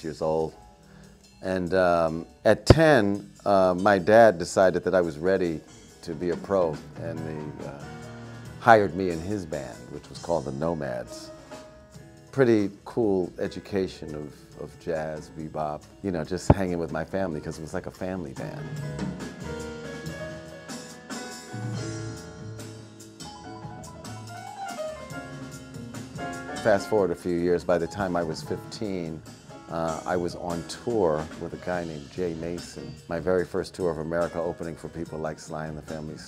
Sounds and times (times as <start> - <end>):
Speech: 0.0 - 0.6, 1.4 - 7.9, 8.6 - 11.3, 12.3 - 18.7, 26.6 - 36.2
Music: 0.0 - 36.2.